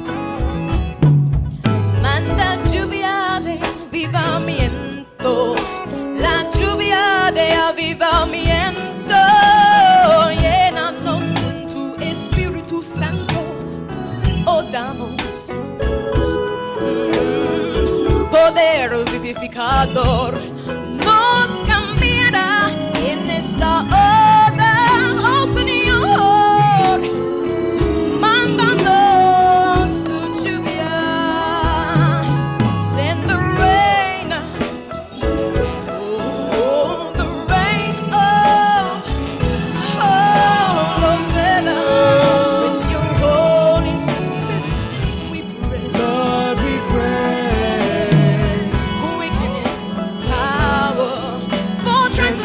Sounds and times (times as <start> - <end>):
Music: 0.0 - 52.4.